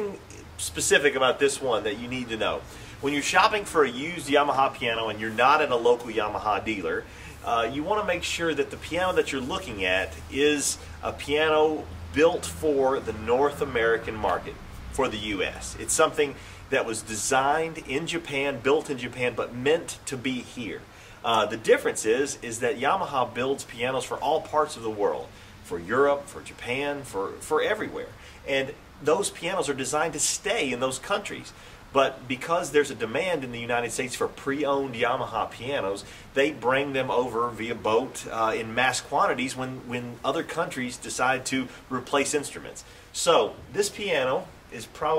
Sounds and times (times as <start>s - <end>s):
Speech: 0.0s - 45.1s.